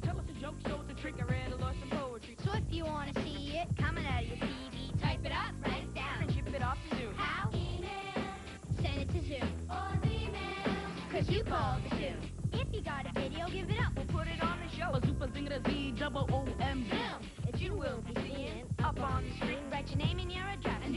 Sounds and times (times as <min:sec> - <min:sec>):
Music: 0:00.0 - 0:20.9.